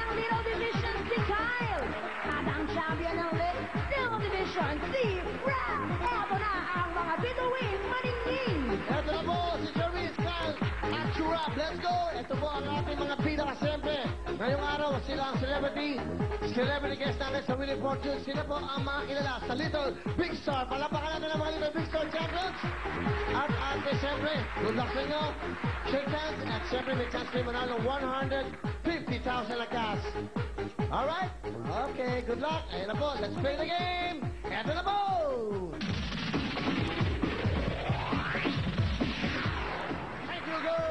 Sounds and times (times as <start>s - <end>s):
Music: 0.0s - 40.9s.